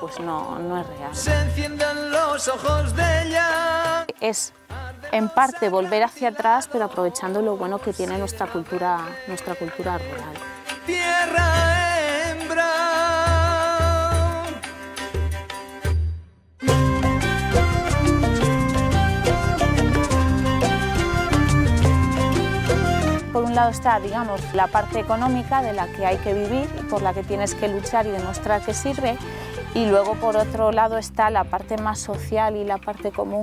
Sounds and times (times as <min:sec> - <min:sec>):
Speech: 0:00.0 - 0:01.2, 0:04.1 - 0:04.5, 0:05.2 - 0:10.4, 0:23.4 - 0:29.2, 0:29.8 - 0:33.4
Middle Eastern music: 0:00.0 - 0:33.4.